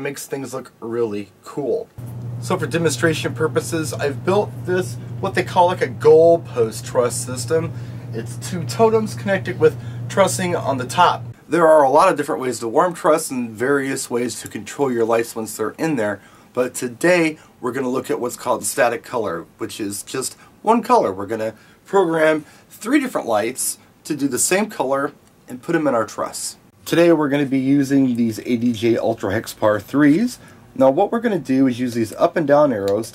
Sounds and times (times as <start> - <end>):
Speech: 0.0 - 33.1.